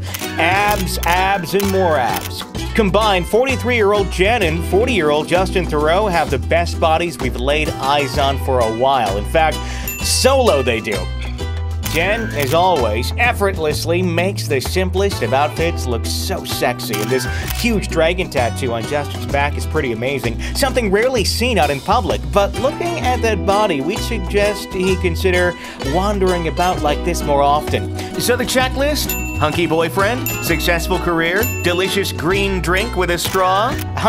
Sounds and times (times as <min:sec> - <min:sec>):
Music: 0:00.0 - 0:34.0
Speech: 0:00.4 - 0:11.1, 0:11.9 - 0:34.0.